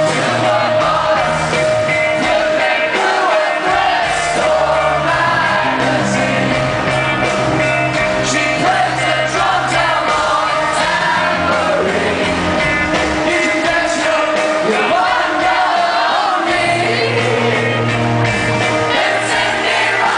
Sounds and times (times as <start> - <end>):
Rock and roll: 0.0 - 20.1.